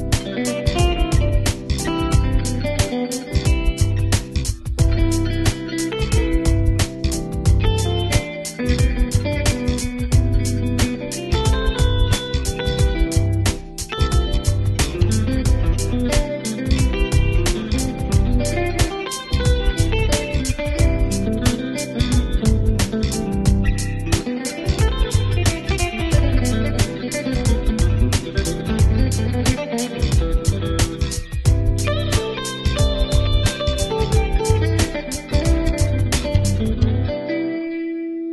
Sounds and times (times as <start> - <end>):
Bass guitar: 0.0 - 37.2
Electric guitar: 0.0 - 38.3.